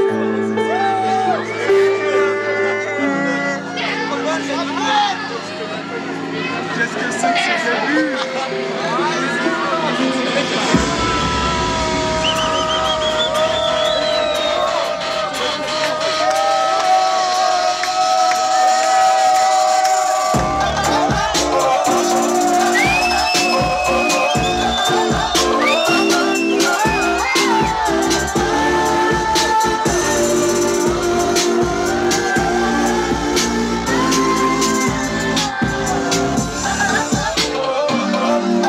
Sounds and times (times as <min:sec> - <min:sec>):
Music: 0:00.0 - 0:38.6.